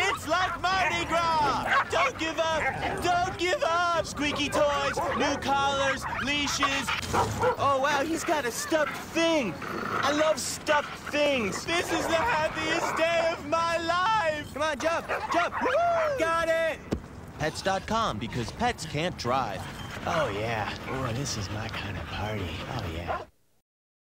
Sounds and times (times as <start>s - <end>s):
Speech: 0.0s - 7.0s, 7.6s - 16.8s, 17.4s - 23.3s.